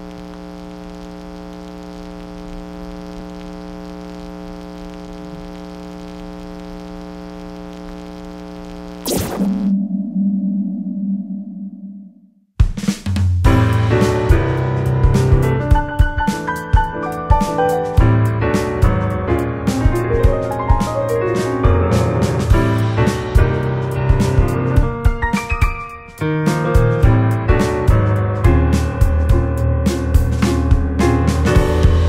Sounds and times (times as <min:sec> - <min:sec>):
Piano: 0:13.4 - 0:32.0.